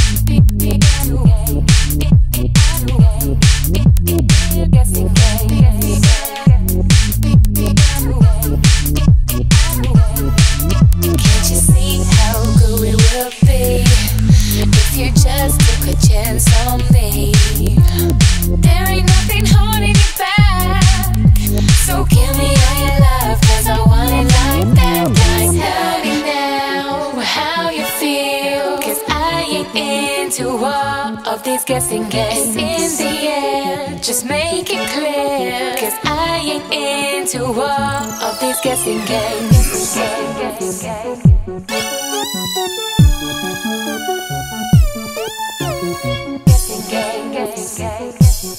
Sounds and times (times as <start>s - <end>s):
Electronic music: 0.0s - 27.8s, 32.0s - 48.5s.